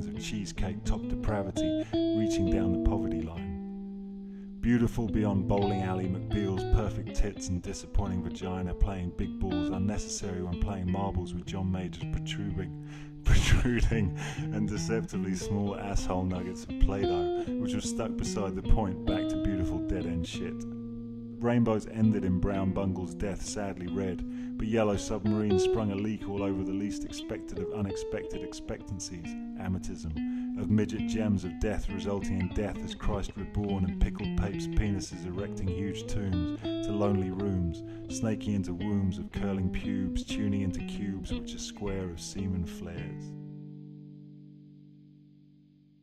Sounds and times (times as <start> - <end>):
Speech: 0.0 - 3.5, 4.6 - 20.7, 21.4 - 43.3
Music: 0.0 - 46.0.